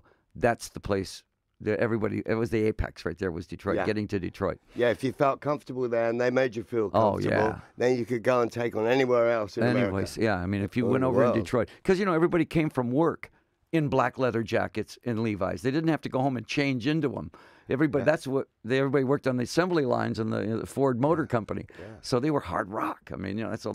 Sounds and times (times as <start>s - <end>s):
Speech: 0.4s - 23.7s.